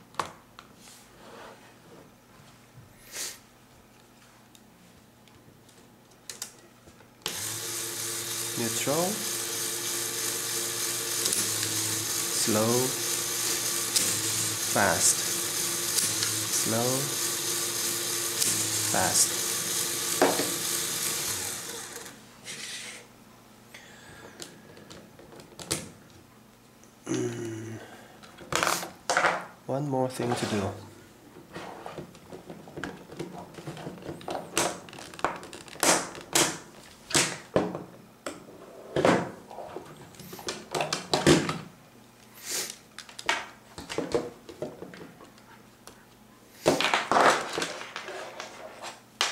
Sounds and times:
Speech: 12.4 - 13.0, 16.6 - 17.2, 19.0 - 19.3, 29.7 - 30.9.

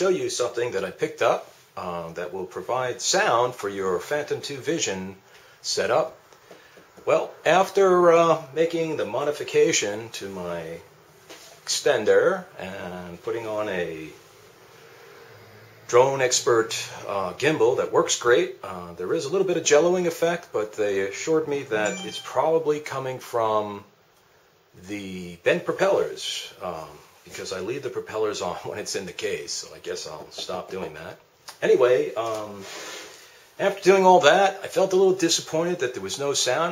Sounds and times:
Speech: 0.0 - 6.2, 7.0 - 10.9, 11.6 - 14.2, 15.9 - 23.9, 24.7 - 32.7, 33.6 - 36.7.

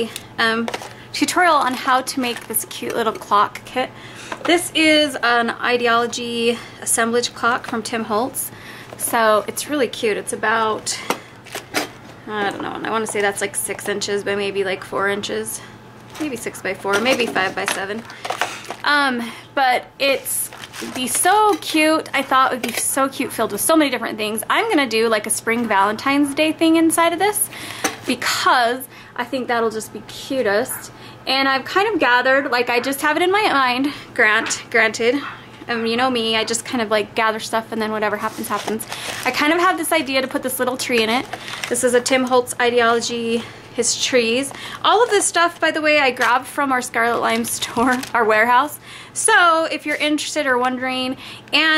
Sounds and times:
Speech: 0.0 - 11.1, 12.3 - 18.1, 18.8 - 51.7.

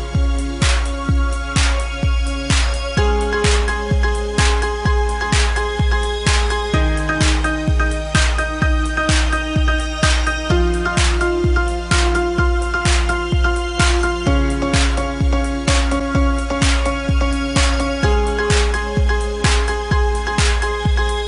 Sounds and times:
Soundtrack music: 0.0 - 21.2.

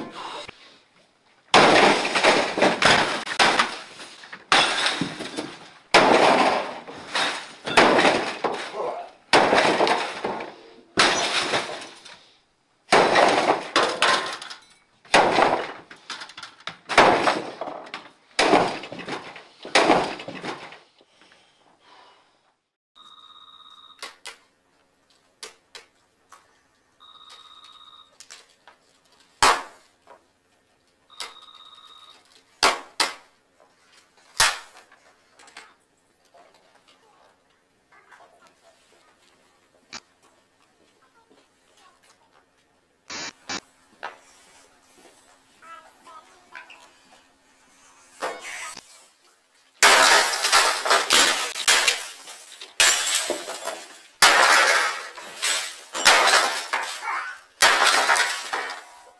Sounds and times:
Smash, crash: 1.5 - 12.0, 12.9 - 14.4, 15.1 - 15.9, 16.9 - 17.8, 18.4 - 20.8, 49.8 - 59.0.

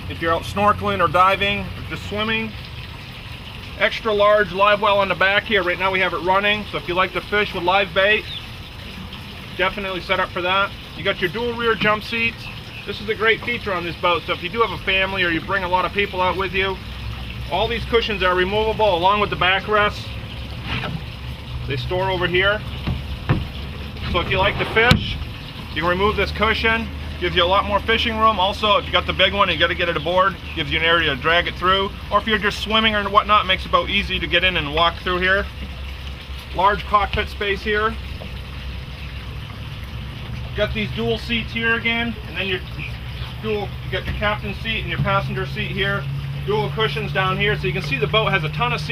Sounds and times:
Speech: 0.1 - 2.6, 3.8 - 8.3, 9.6 - 16.8, 17.5 - 20.1, 21.7 - 22.6, 25.8 - 35.5, 36.5 - 38.0, 40.6 - 48.9.

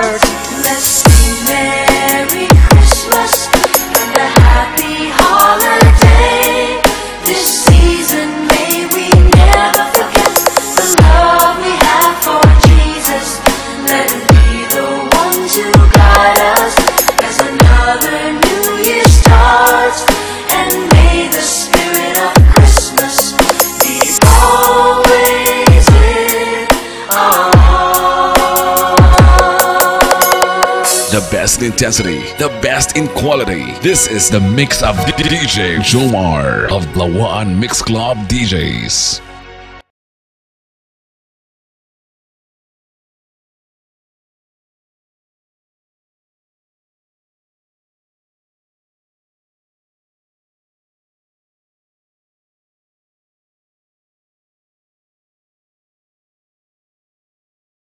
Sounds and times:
Christian music: 0.0 - 39.9
Christmas music: 0.0 - 39.9.

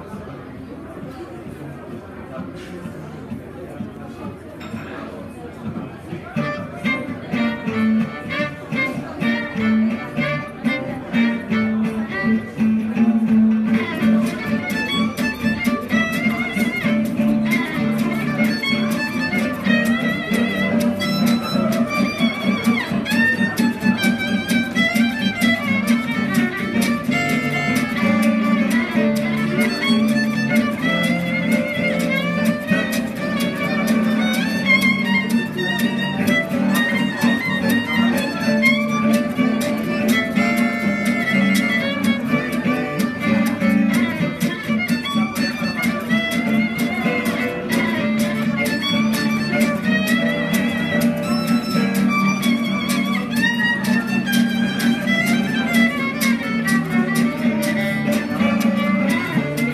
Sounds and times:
Flamenco: 2.5 - 59.7
Guitar: 3.2 - 59.7
Violin, fiddle: 6.2 - 59.7
Swing music: 6.4 - 59.7.

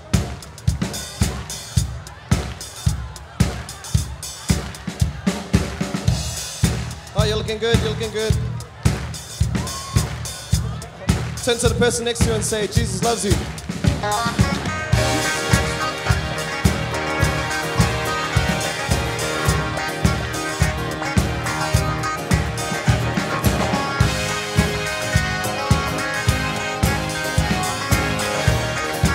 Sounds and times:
Music: 0.0 - 29.1
Speech: 7.0 - 13.5.

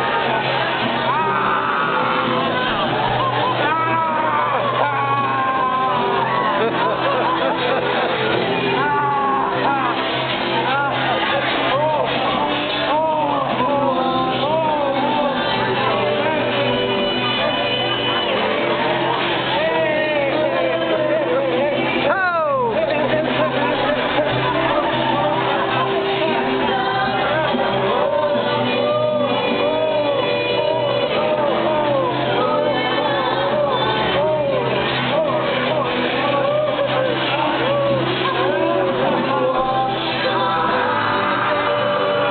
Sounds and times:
Music: 0.0 - 42.3.

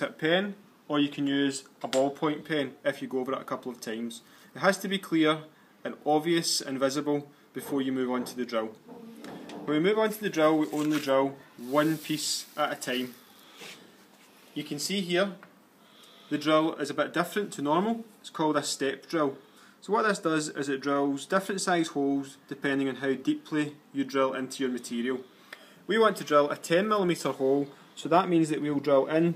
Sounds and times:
Speech: 0.0 - 8.8, 9.7 - 13.2, 14.6 - 15.4, 16.3 - 25.2, 25.9 - 29.3.

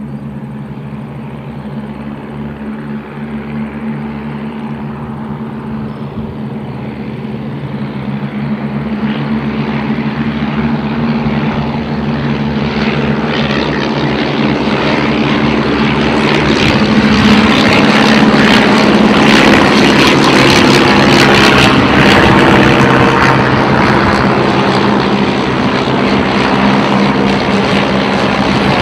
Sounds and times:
Aircraft: 0.0 - 28.8.

